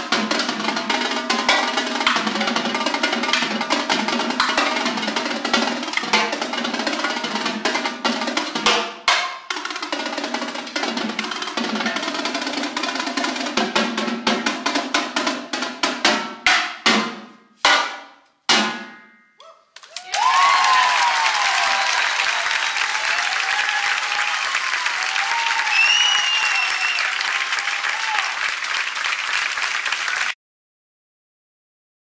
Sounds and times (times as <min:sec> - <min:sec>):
Snare drum: 0:00.0 - 0:19.0.